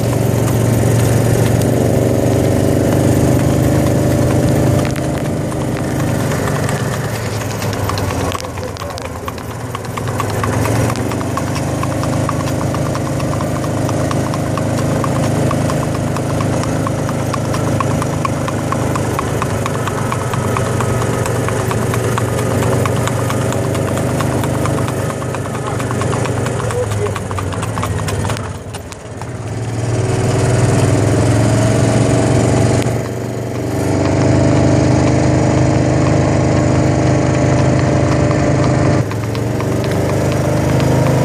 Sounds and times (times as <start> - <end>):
Clip-clop: 0.0 - 41.2.